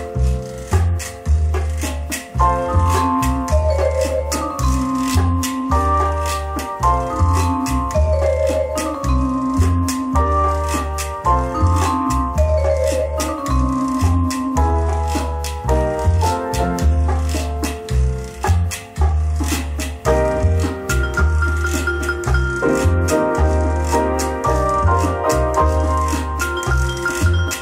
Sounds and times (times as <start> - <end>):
Electric piano: 0.0 - 27.6
Jazz: 0.0 - 27.6
Percussion: 0.0 - 27.6.